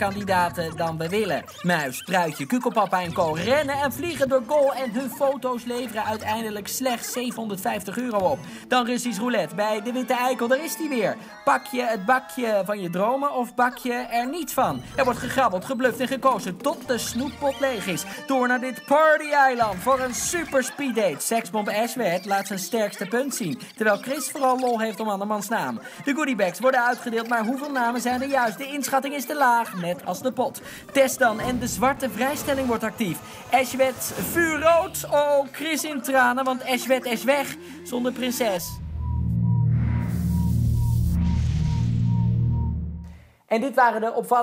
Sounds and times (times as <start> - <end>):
Music: 0.0 - 24.2, 25.2 - 43.3
Speech: 0.0 - 38.8, 43.5 - 44.4.